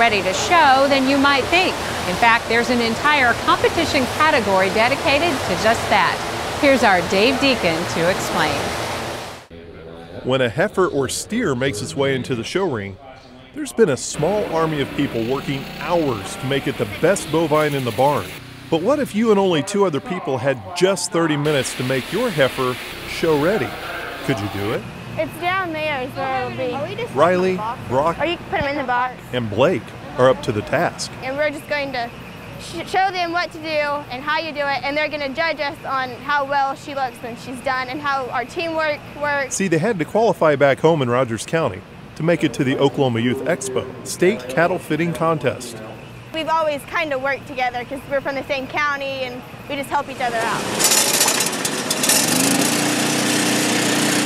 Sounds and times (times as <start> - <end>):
Speech: 9.6 - 25.4, 29.4 - 50.6.